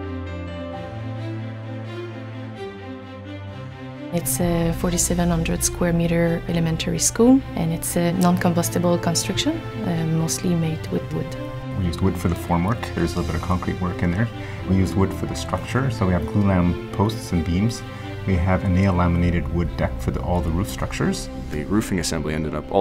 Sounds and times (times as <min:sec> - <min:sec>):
Music: 0:00.0 - 0:22.8
Speech: 0:04.2 - 0:22.8.